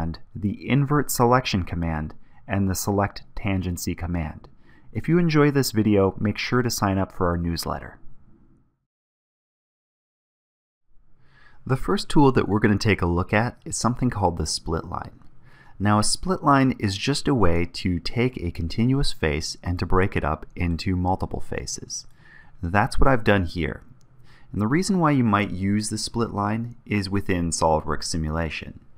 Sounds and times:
Speech: 0.0s - 8.0s, 11.7s - 15.2s, 15.8s - 23.9s, 24.5s - 28.9s.

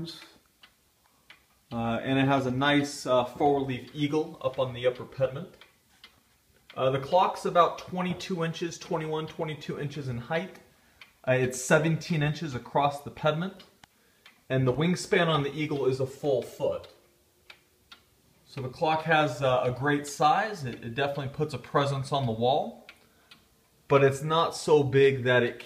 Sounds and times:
Speech: 0.0s - 0.4s, 1.8s - 5.6s, 6.7s - 10.6s, 11.3s - 13.7s, 14.5s - 17.0s, 18.5s - 22.9s, 23.9s - 25.6s
Tick-tock: 0.0s - 25.6s.

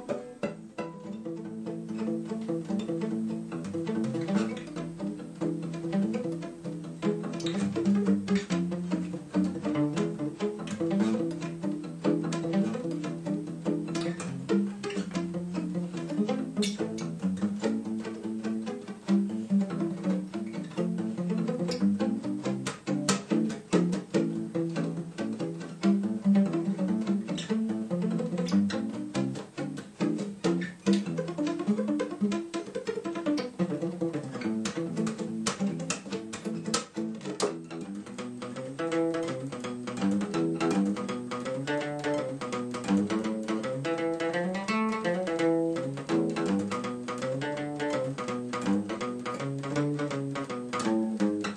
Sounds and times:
Pizzicato: 0.0s - 51.5s.

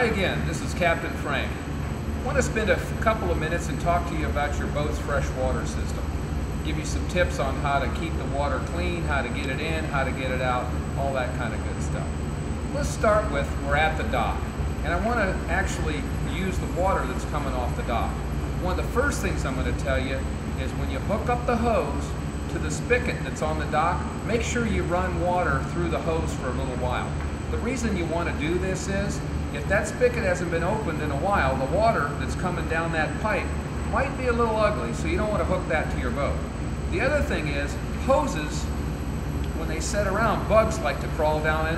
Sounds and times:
Speech: 0.0s - 12.1s, 12.7s - 38.8s, 39.6s - 41.7s.

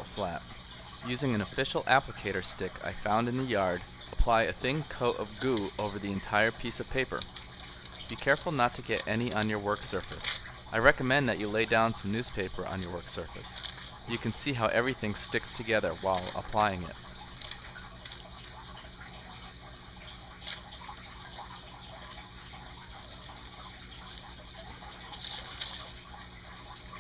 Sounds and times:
Water: 0.0s - 27.0s.

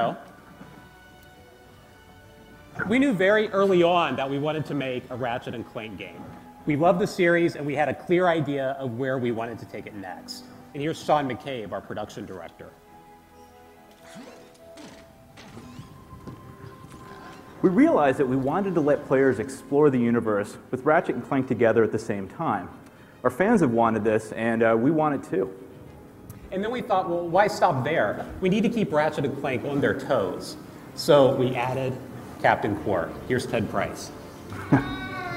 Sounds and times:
Music: 0.0s - 35.3s
Speech: 2.8s - 12.8s, 26.5s - 34.1s.

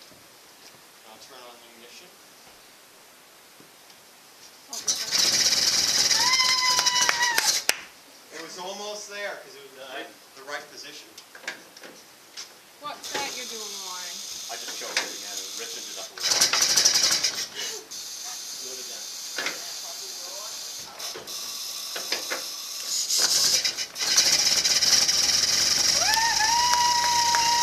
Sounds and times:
Heavy engine (low frequency): 4.8s - 6.4s, 16.1s - 27.6s.

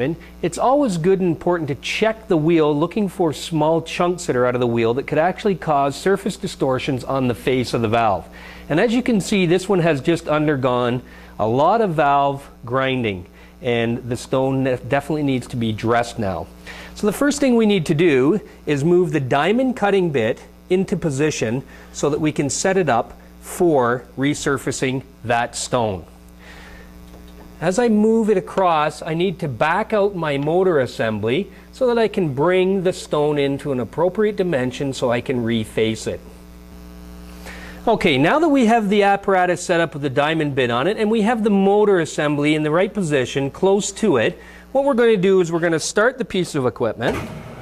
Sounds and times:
Speech: 0.0s - 26.1s, 27.6s - 36.3s, 37.8s - 47.2s.

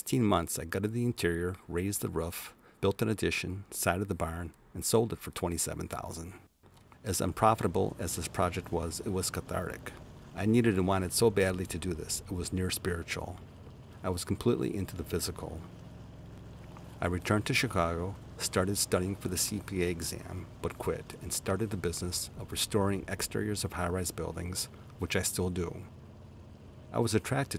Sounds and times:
Speech: 0.0s - 6.4s, 7.0s - 13.4s, 14.0s - 15.7s, 17.0s - 25.9s, 26.9s - 27.5s
Vehicle: 0.0s - 27.5s.

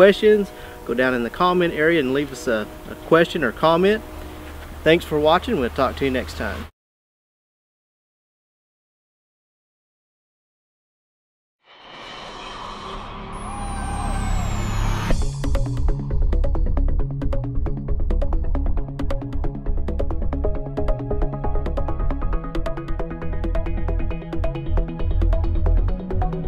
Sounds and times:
Vehicle: 2.4s - 6.7s.

